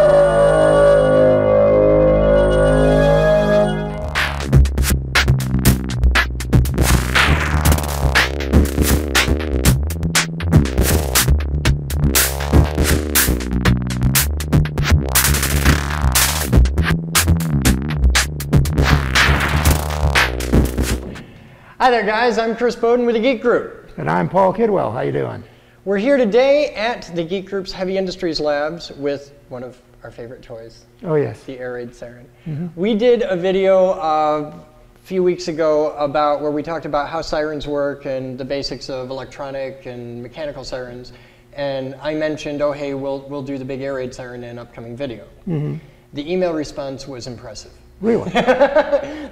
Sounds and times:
Speech: 21.8 - 48.4.

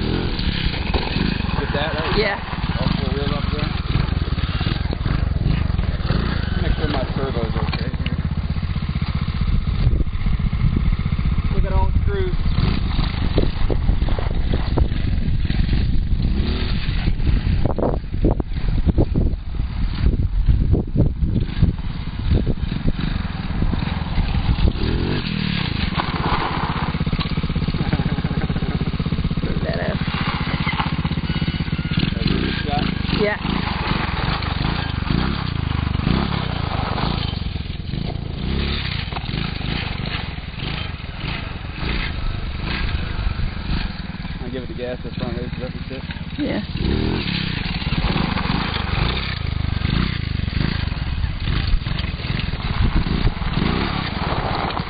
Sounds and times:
Vehicle: 0.0 - 54.9
Speech: 6.6 - 8.0, 11.5 - 12.4, 32.2 - 33.4, 44.4 - 46.6.

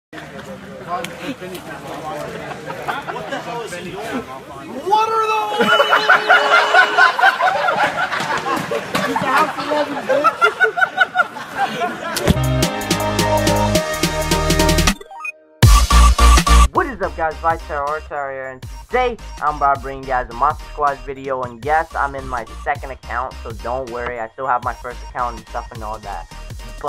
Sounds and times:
Snicker: 2.4 - 3.7, 5.6 - 12.3.

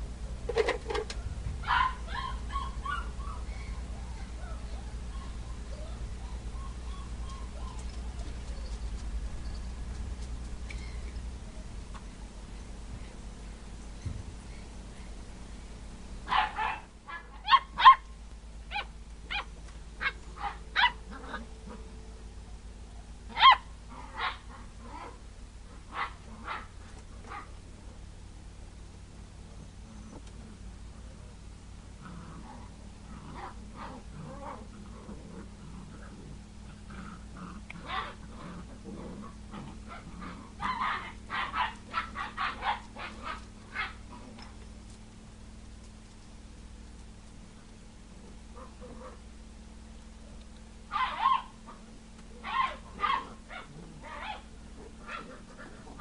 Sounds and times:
Growling: 21.1 - 21.9, 23.9 - 27.5, 32.0 - 41.2, 48.2 - 49.2, 52.9 - 56.0.

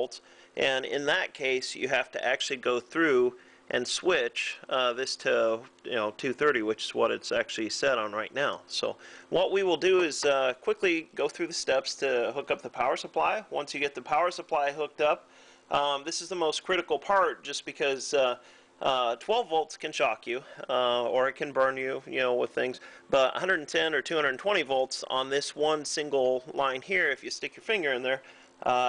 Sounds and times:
Speech: 0.0 - 28.8.

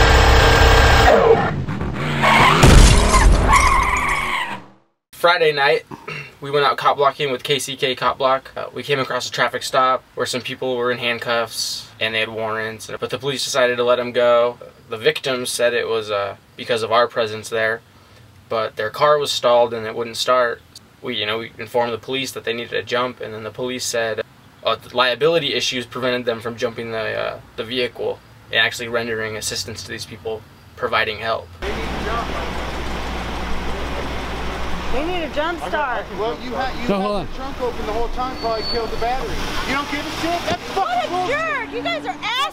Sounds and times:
Speech: 5.2 - 17.8, 18.5 - 32.6, 35.0 - 42.5
Traffic noise, roadway noise: 24.2 - 24.7, 28.2 - 42.5.

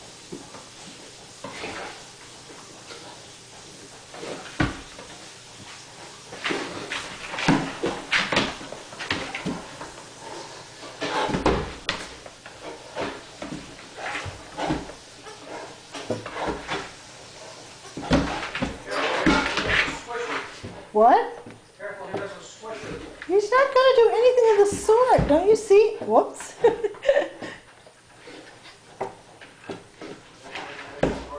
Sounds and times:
Speech: 19.9 - 26.5.

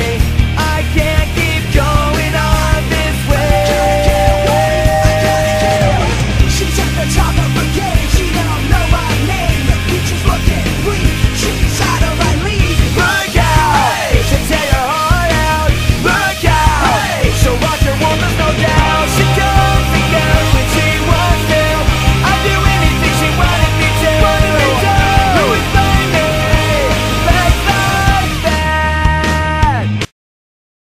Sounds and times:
Music: 0.0 - 30.1.

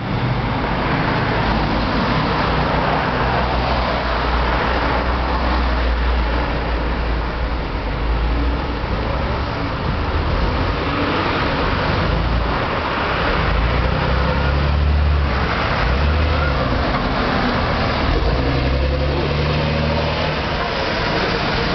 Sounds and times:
Bus: 0.0 - 21.7.

